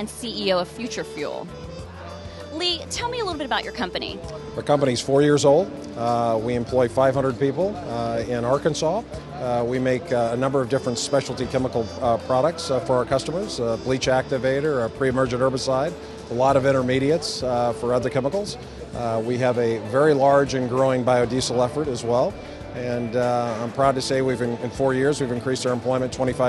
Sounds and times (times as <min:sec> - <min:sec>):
Music: 0:00.0 - 0:26.4
Speech: 0:06.0 - 0:26.4.